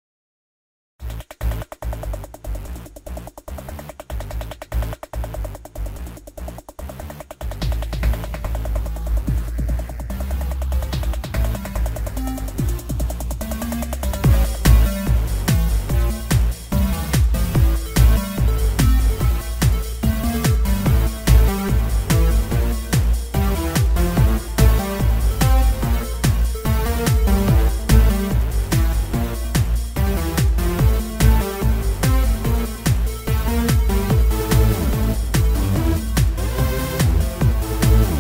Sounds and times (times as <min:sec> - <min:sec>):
Electronica: 0:01.0 - 0:38.2.